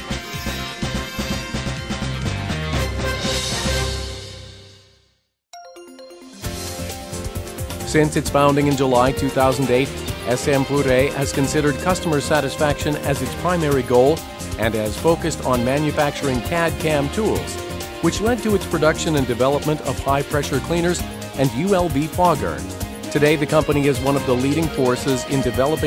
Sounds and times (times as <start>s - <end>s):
Music: 0.0s - 25.8s
Speech: 7.9s - 25.8s.